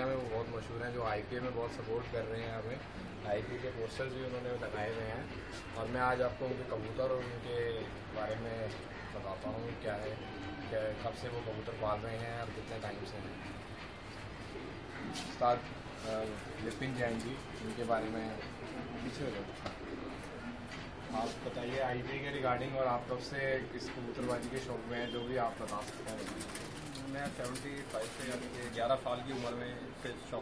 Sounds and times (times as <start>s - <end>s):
Male speech, man speaking: 0.0s - 13.5s, 15.0s - 19.7s, 21.1s - 30.4s
Outside, urban or manmade: 0.0s - 30.4s.